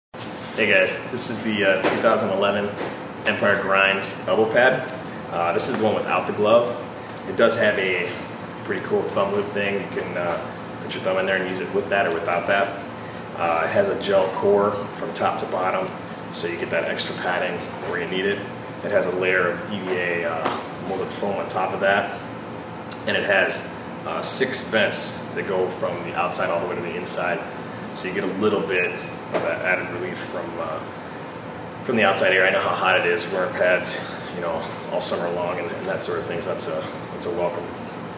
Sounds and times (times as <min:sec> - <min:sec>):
Speech: 0:00.6 - 0:12.8, 0:13.4 - 0:22.2, 0:23.0 - 0:30.9, 0:31.8 - 0:37.9.